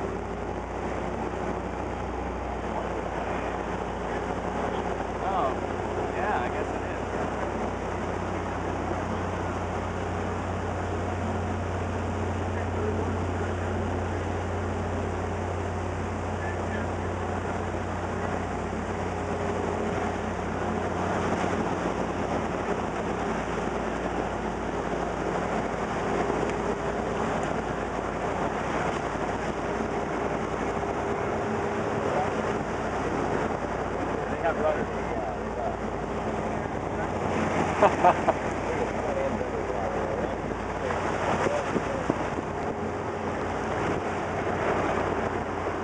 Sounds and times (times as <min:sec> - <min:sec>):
Motorboat, speedboat: 0:00.0 - 0:45.8
Waves, surf: 0:00.0 - 0:45.8.